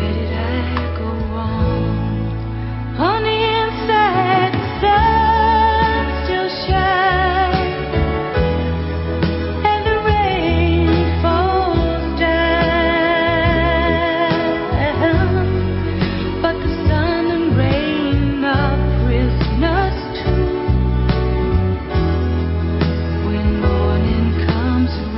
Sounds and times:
Music: 0.0 - 25.1.

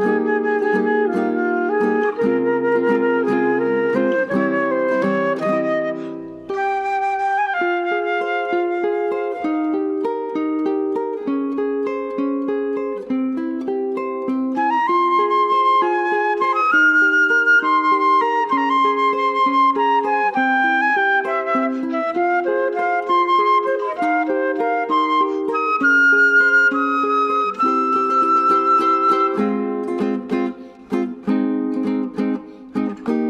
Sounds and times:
Music: 0.0 - 33.3.

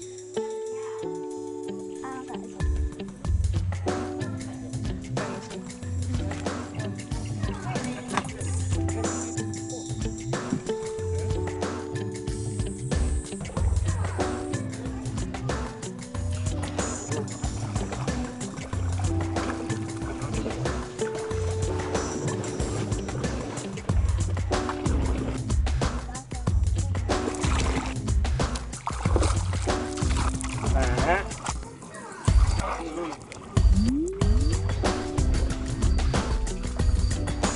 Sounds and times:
Rowboat, canoe, kayak: 10.1 - 37.5.

